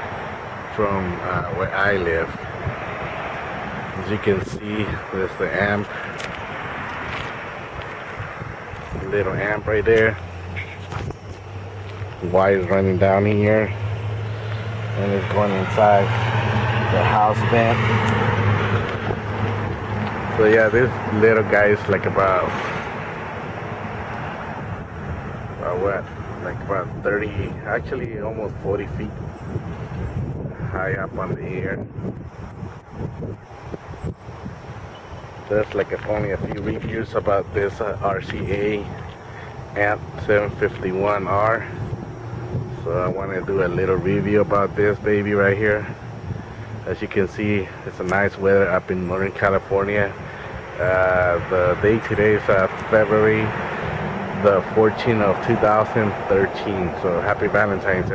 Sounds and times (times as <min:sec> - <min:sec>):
Outside, urban or manmade: 0:00.0 - 0:58.1
Speech: 0:00.7 - 0:02.4, 0:04.0 - 0:06.0, 0:09.0 - 0:10.9, 0:12.2 - 0:13.8, 0:15.0 - 0:16.1, 0:16.9 - 0:17.8, 0:20.4 - 0:22.6, 0:25.6 - 0:29.2, 0:30.6 - 0:31.8, 0:35.5 - 0:39.0, 0:39.8 - 0:41.8, 0:42.8 - 0:46.0, 0:46.8 - 0:50.2, 0:50.8 - 0:53.6, 0:54.4 - 0:58.1.